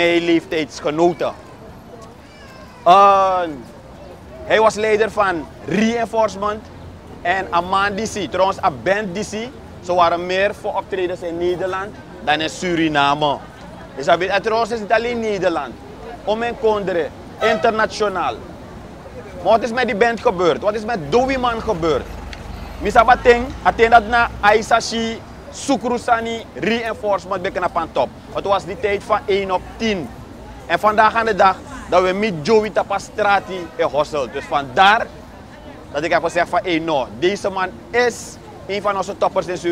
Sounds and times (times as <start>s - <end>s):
Speech: 0.0s - 1.5s, 2.8s - 3.7s, 4.4s - 18.4s, 19.1s - 22.1s, 22.8s - 39.7s.